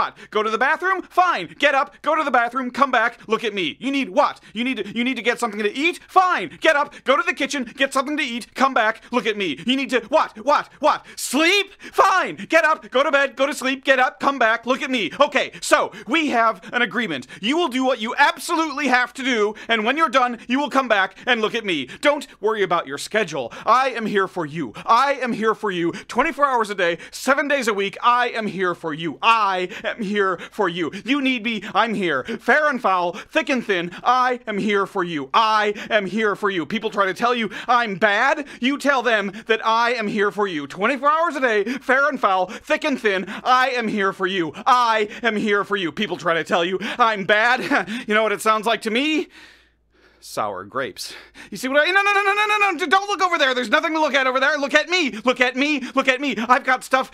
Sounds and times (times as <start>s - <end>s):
Speech: 0.0s - 49.3s, 50.2s - 57.1s.